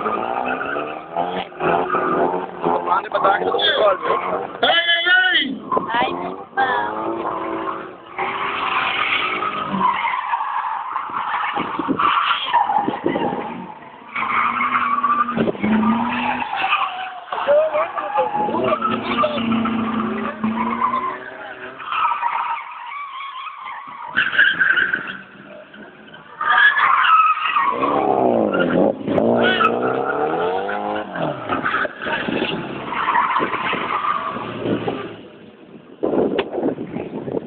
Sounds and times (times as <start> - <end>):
Race car, auto racing: 0.0 - 37.4
Skidding: 0.0 - 37.4
Speech: 2.8 - 7.0, 17.4 - 19.6.